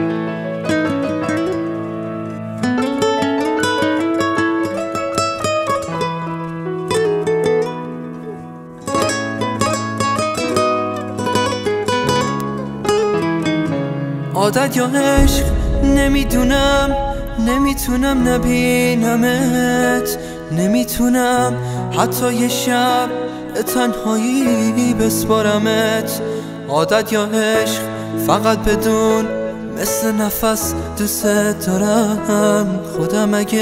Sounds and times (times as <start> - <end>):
Music: 0.0 - 33.6.